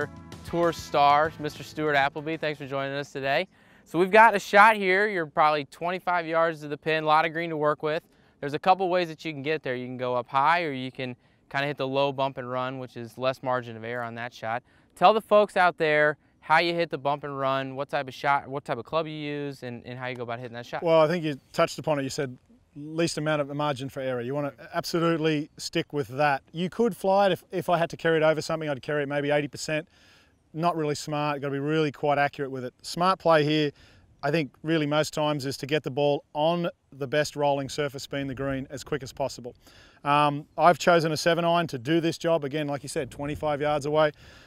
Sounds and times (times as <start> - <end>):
Speech: 0.0 - 29.9, 30.6 - 44.2.